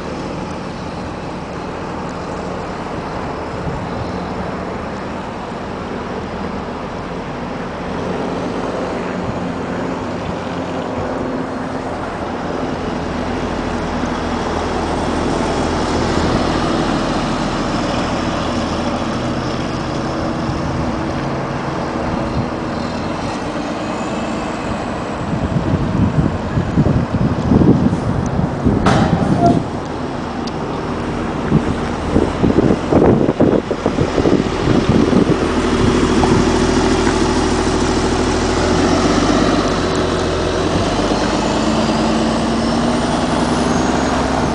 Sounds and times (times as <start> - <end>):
Vehicle: 0.0 - 44.5.